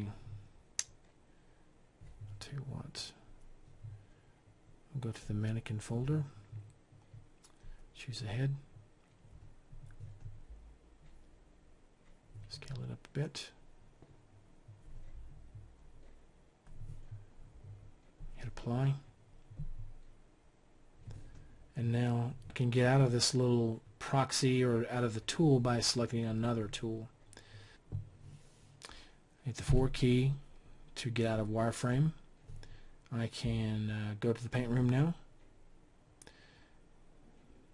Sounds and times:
Speech: 0:00.0 - 0:00.2, 0:02.4 - 0:03.2, 0:04.9 - 0:06.4, 0:08.0 - 0:08.7, 0:12.5 - 0:13.6, 0:18.4 - 0:19.1, 0:21.8 - 0:27.1, 0:29.4 - 0:32.2, 0:33.1 - 0:35.3.

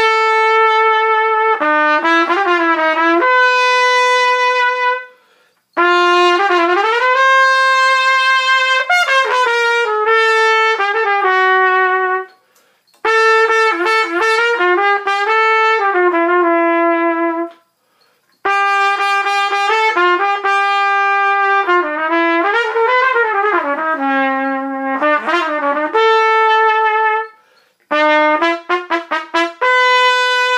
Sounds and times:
Trumpet: 0:00.0 - 0:30.5.

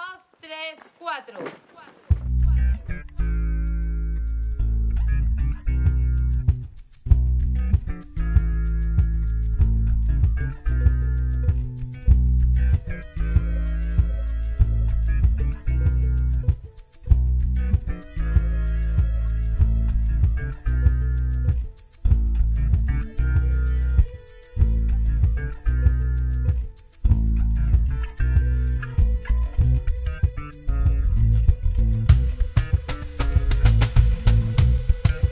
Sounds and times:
Flamenco: 0:01.4 - 0:35.3.

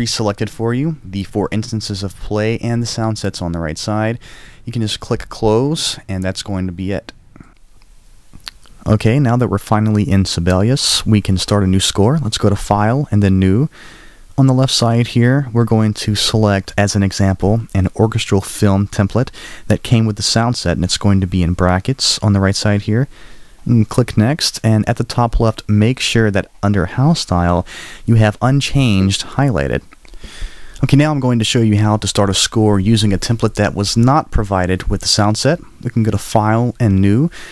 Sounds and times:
Speech: 0:00.0 - 0:07.2, 0:08.5 - 0:13.7, 0:14.4 - 0:29.9, 0:30.8 - 0:37.4.

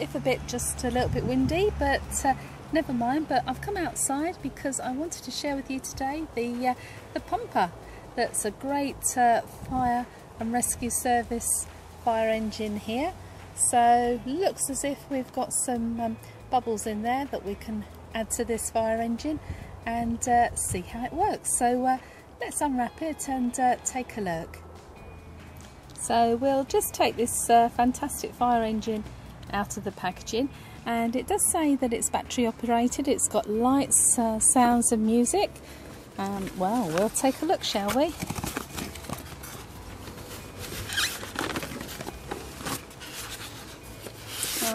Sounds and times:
Speech: 0:00.0 - 0:24.5, 0:26.0 - 0:35.5, 0:36.2 - 0:38.2.

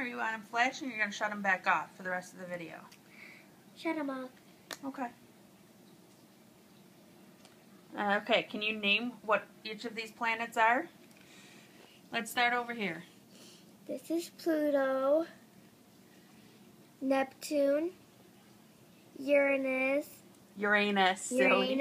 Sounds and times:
Inside, small room: 0:00.0 - 0:21.8.

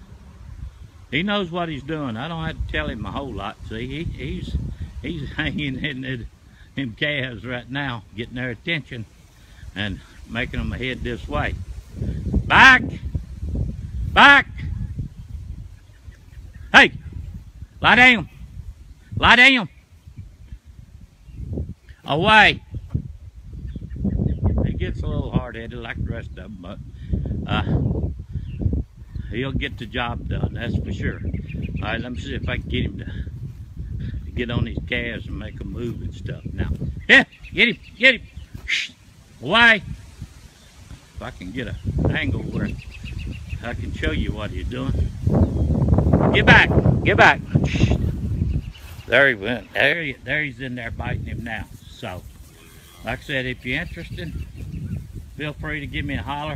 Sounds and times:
Speech: 0:01.1 - 0:09.1, 0:09.8 - 0:11.6, 0:12.5 - 0:13.0, 0:14.2 - 0:14.7, 0:17.8 - 0:18.3, 0:19.2 - 0:19.7, 0:22.0 - 0:22.6, 0:24.6 - 0:26.8, 0:29.3 - 0:31.2, 0:31.8 - 0:33.2, 0:34.4 - 0:39.9, 0:41.2 - 0:42.8, 0:43.6 - 0:45.0, 0:46.3 - 0:48.1, 0:49.0 - 0:52.3, 0:53.0 - 0:54.4, 0:55.4 - 0:56.5.

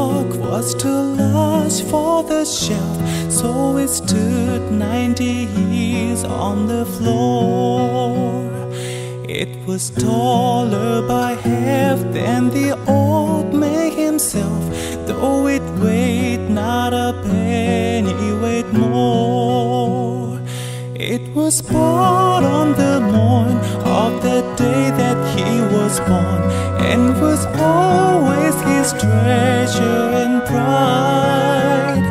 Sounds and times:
Music: 0:00.0 - 0:32.1.

